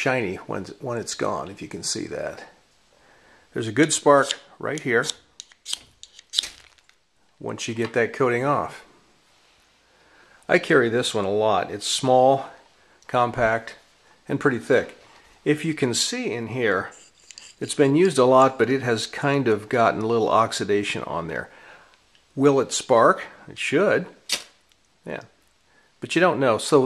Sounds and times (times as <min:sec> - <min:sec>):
Speech: 0:00.0 - 0:02.6, 0:03.5 - 0:05.2, 0:07.4 - 0:08.9, 0:10.5 - 0:17.0, 0:17.6 - 0:21.5, 0:22.4 - 0:24.2, 0:25.0 - 0:25.4, 0:26.0 - 0:26.8
Inside, small room: 0:00.0 - 0:26.8.